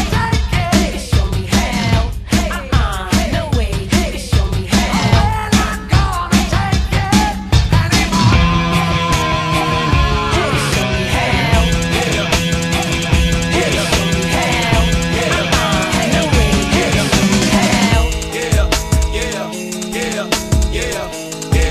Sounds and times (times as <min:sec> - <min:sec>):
Progressive rock: 0:07.4 - 0:21.7.